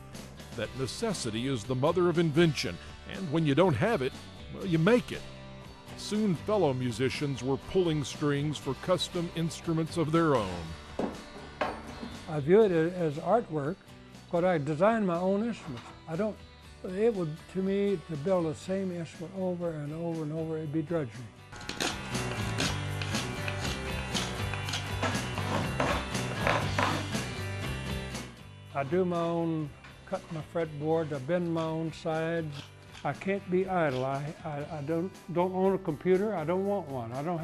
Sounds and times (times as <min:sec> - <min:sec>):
Guitar: 0:00.0 - 0:37.4
Speech: 0:00.6 - 0:05.2, 0:06.0 - 0:10.7, 0:12.3 - 0:21.3, 0:28.8 - 0:37.4.